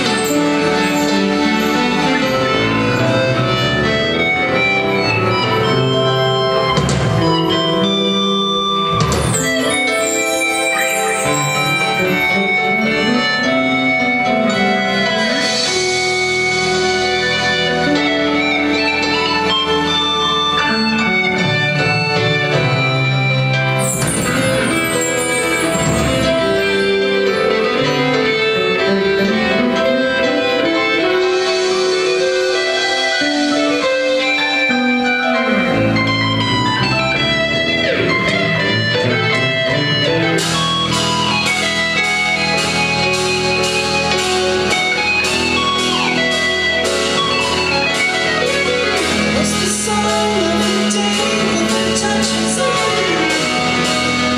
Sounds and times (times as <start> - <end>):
Inside, large room or hall: 0.0 - 54.3
Music: 0.0 - 54.3.